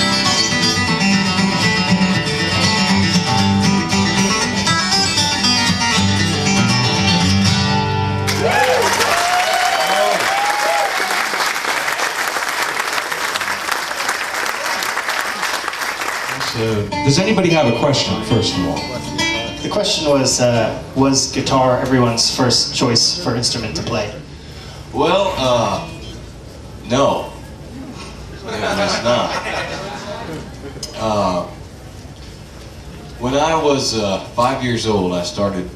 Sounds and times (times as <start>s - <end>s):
Country: 0.0s - 8.3s
Acoustic guitar: 0.0s - 8.8s, 16.3s - 28.3s
Applause: 8.3s - 16.6s.